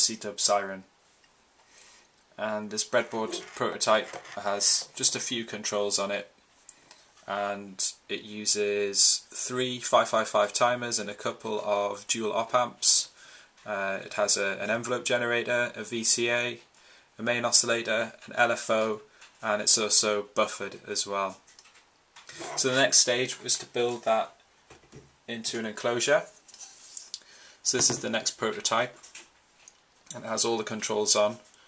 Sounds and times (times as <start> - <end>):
Speech: 0.0 - 0.9, 2.4 - 6.3, 7.3 - 21.4, 22.4 - 24.4, 25.3 - 26.4, 27.6 - 29.0, 30.1 - 31.5.